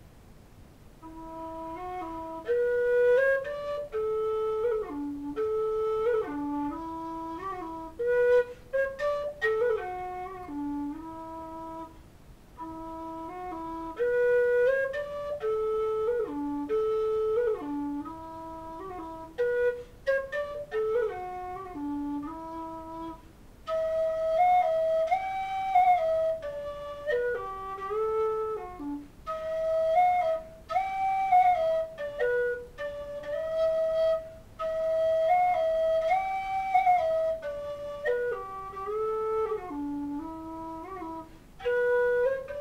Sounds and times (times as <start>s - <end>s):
Music: 1.0s - 12.0s, 12.6s - 42.6s.